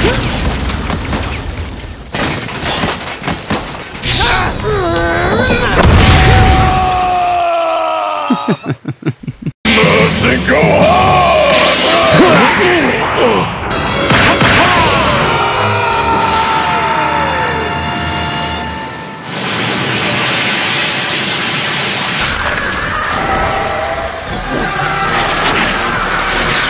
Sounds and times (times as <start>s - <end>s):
Speech: 9.7s - 13.5s
Music: 9.7s - 19.3s.